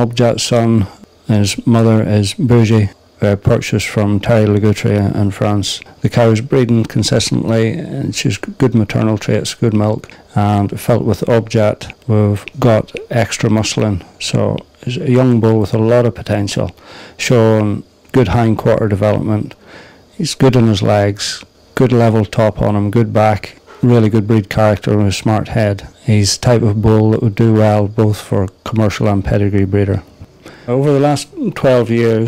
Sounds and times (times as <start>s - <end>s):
Speech: 0.0s - 30.1s, 30.7s - 32.2s.